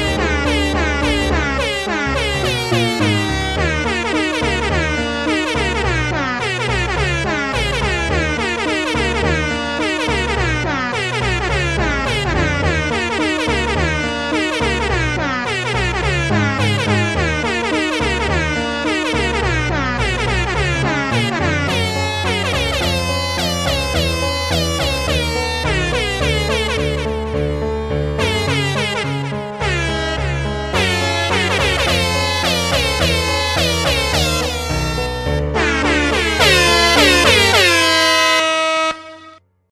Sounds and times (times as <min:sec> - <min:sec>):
Air horn, truck horn: 0:00.0 - 0:39.5
Music: 0:00.0 - 0:39.7.